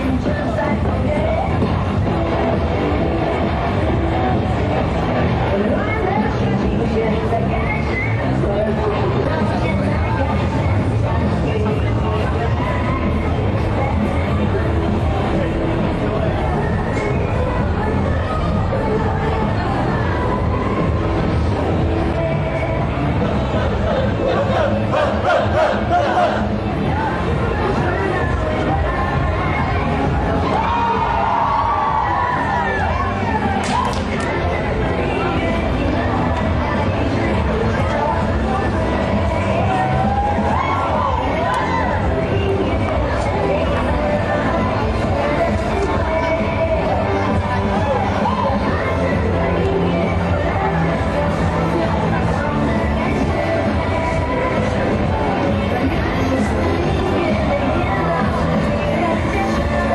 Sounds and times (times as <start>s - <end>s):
Music: 0.0s - 59.9s.